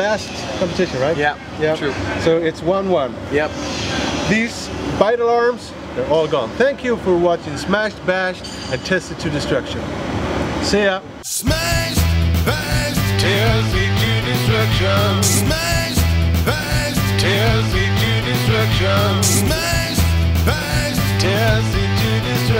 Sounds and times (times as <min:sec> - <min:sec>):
Speech: 0:00.0 - 0:03.6, 0:04.3 - 0:09.9, 0:10.6 - 0:11.1
Music: 0:11.3 - 0:22.5.